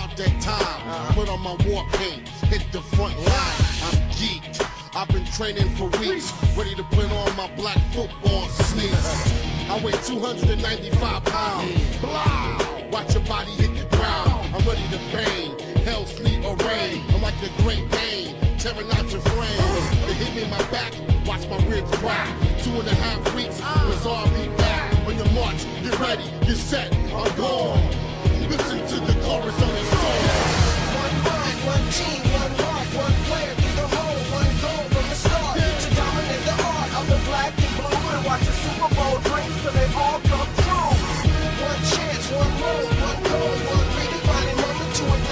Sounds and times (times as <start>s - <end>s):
Music: 0.0s - 45.3s.